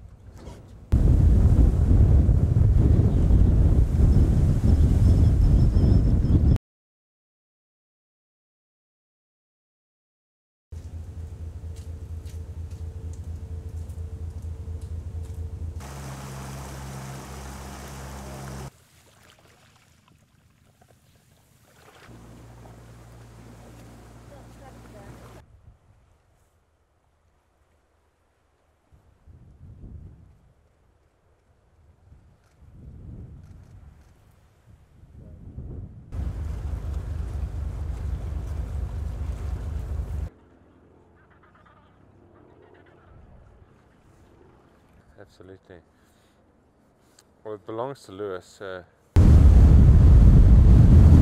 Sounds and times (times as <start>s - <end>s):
Ocean: 0.9s - 6.2s, 15.8s - 25.4s, 36.1s - 40.3s, 42.8s - 46.4s.